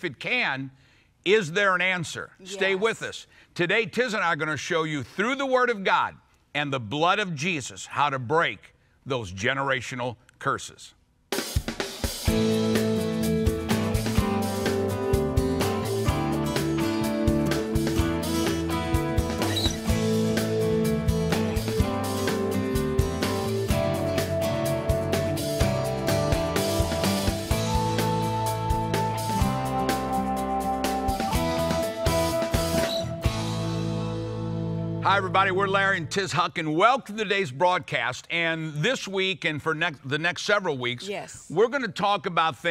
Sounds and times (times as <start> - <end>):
Speech: 1.3 - 11.0, 35.0 - 42.7
Music: 11.3 - 36.5.